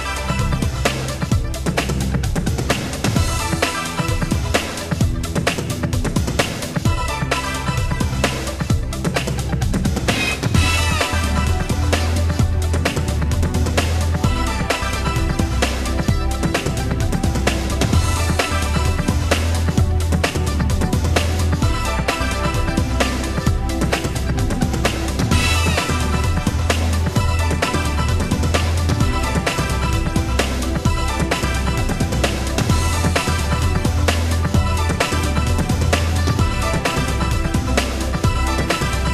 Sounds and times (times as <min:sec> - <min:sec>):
Music: 0:00.0 - 0:39.1.